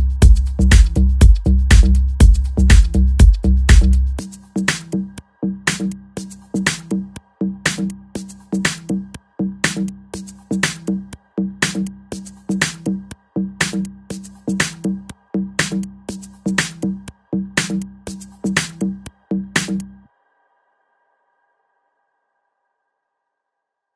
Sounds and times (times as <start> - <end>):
Music: 0.0 - 23.9.